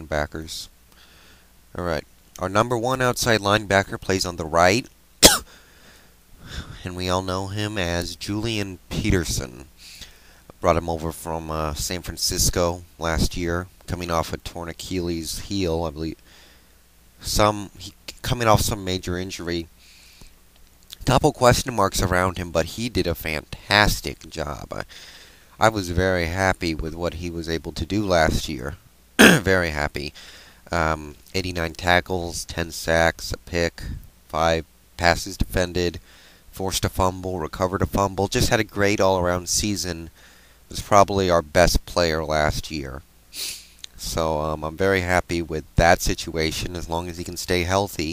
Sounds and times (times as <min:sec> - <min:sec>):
Speech: 0:00.0 - 0:00.8, 0:01.7 - 0:04.9, 0:06.6 - 0:09.7, 0:10.6 - 0:16.2, 0:17.2 - 0:19.7, 0:20.9 - 0:24.9, 0:25.6 - 0:43.0, 0:43.9 - 0:48.1.